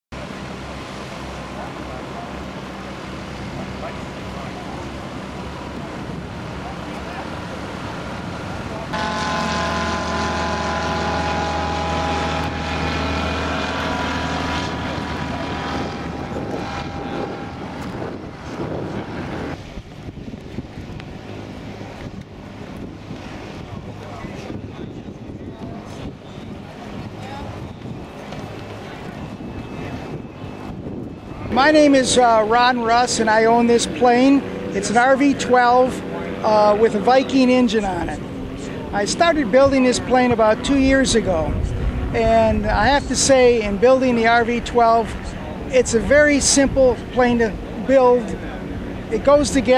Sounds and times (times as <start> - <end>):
Aircraft engine: 0.1 - 49.7.